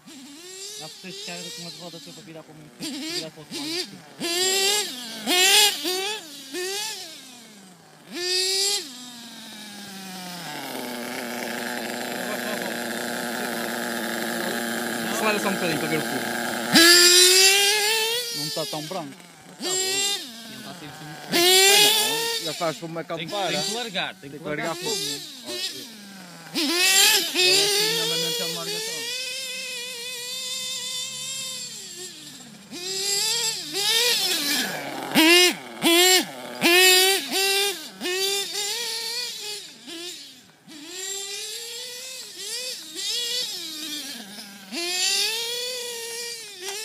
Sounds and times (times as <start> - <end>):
Speech: 0.8 - 4.0, 15.1 - 16.3, 18.4 - 19.2, 19.9 - 25.9, 27.4 - 29.2.